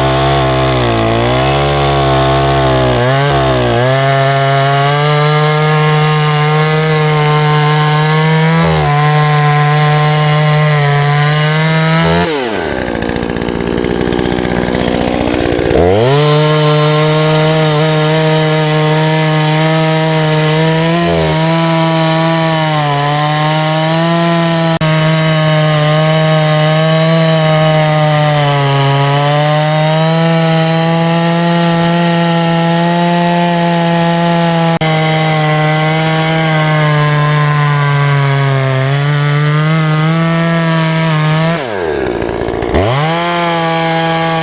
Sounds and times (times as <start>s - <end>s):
Chainsaw: 0.0s - 44.4s
Power tool: 0.0s - 44.4s.